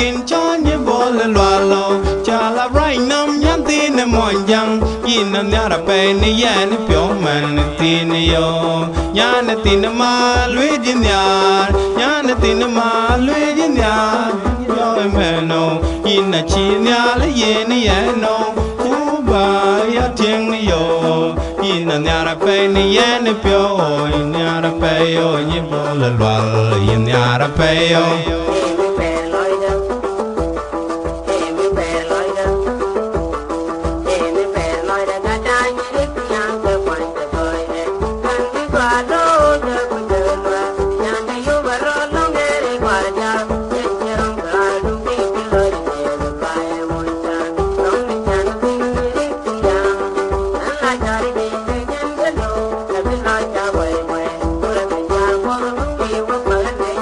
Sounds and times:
Music: 0.0s - 57.0s.

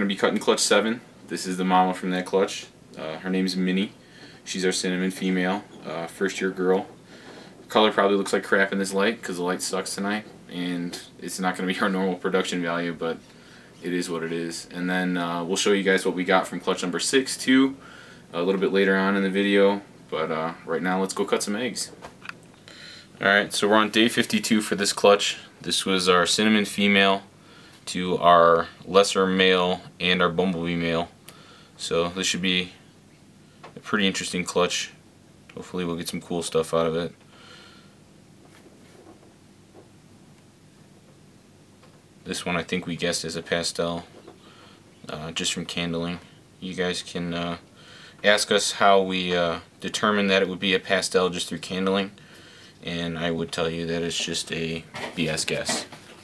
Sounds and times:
Speech: 0.0s - 7.0s, 7.7s - 13.2s, 13.8s - 22.0s, 23.2s - 27.3s, 27.9s - 31.2s, 31.8s - 32.8s, 33.8s - 37.2s, 42.2s - 44.1s, 45.0s - 52.2s, 52.8s - 56.0s
Inside, small room: 0.0s - 56.2s.

